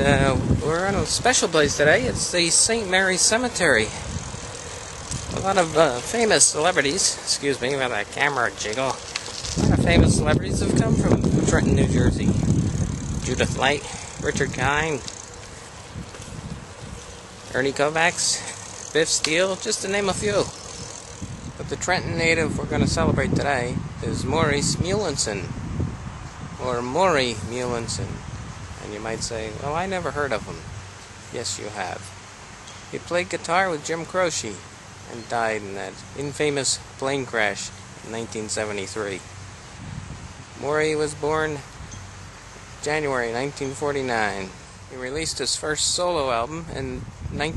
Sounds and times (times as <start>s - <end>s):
Speech: 0.0s - 4.0s, 5.3s - 9.0s, 9.6s - 12.4s, 13.2s - 15.1s, 17.5s - 20.5s, 21.6s - 25.5s, 26.6s - 28.2s, 28.8s - 30.6s, 31.3s - 32.1s, 33.0s - 39.2s, 40.6s - 41.7s, 42.8s - 47.5s
Outside, rural or natural: 0.0s - 47.5s.